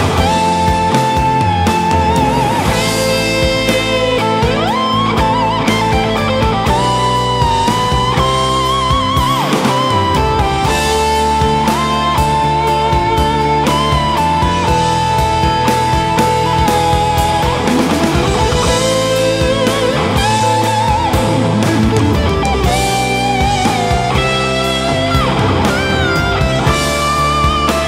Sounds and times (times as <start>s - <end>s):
Electric guitar: 0.0s - 27.8s.